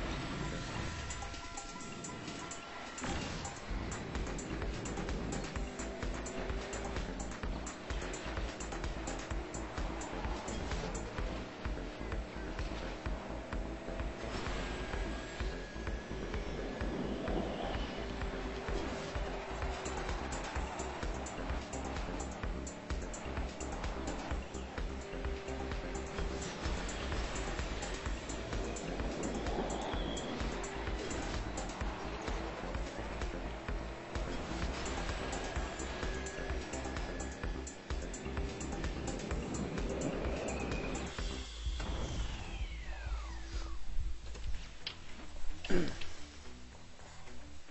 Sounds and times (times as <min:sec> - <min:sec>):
Music: 0:00.0 - 0:47.7
Vehicle: 0:00.0 - 0:47.7.